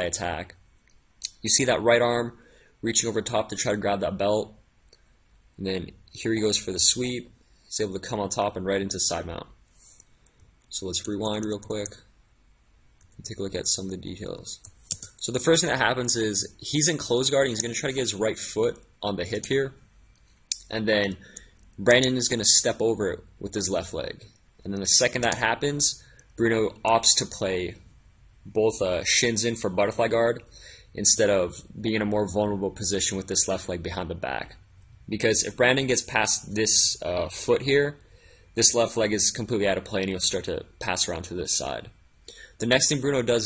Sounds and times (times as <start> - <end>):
Speech: 0.0 - 0.6, 1.2 - 4.6, 5.6 - 9.6, 10.7 - 12.1, 13.2 - 19.8, 20.6 - 27.8, 28.4 - 38.0, 38.6 - 42.0, 42.6 - 43.4.